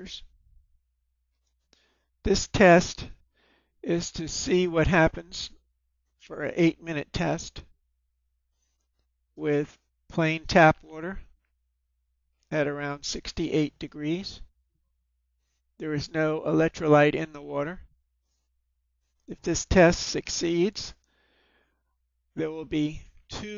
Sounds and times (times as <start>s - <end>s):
Speech: 0.0s - 0.3s, 2.3s - 3.2s, 3.9s - 5.6s, 6.2s - 7.7s, 9.4s - 11.3s, 12.5s - 14.5s, 15.8s - 17.9s, 19.3s - 21.0s, 22.4s - 23.5s.